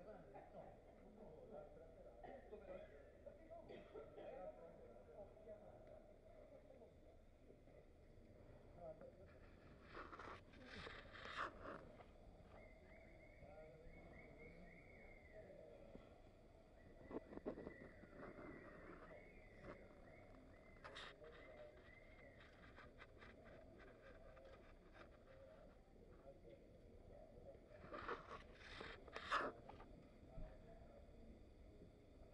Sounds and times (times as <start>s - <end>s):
Speech: 0.0s - 32.3s
Clip-clop: 15.8s - 26.6s.